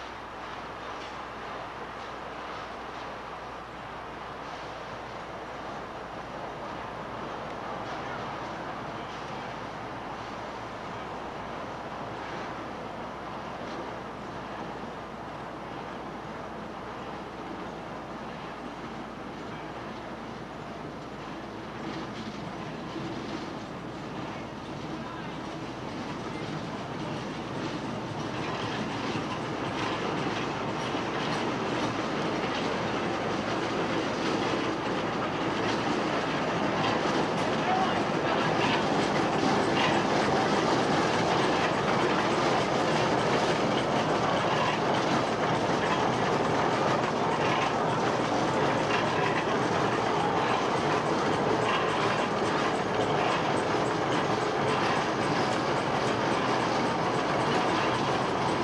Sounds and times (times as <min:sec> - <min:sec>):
Railroad car, train wagon: 0:00.0 - 0:58.6
Train: 0:00.0 - 0:58.6
Clickety-clack: 0:20.9 - 0:58.6.